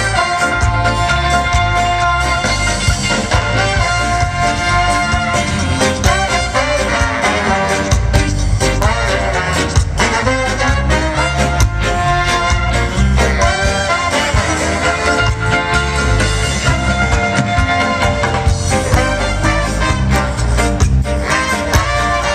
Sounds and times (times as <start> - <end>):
Orchestra: 0.0 - 22.3.